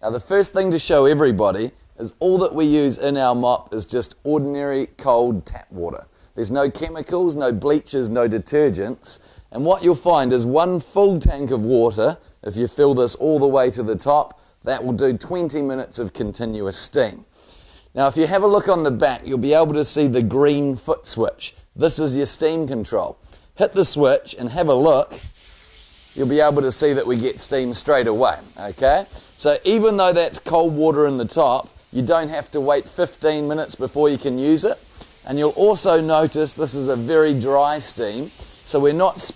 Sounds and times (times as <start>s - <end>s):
Speech: 0.0s - 17.3s, 18.0s - 25.2s, 26.2s - 39.3s.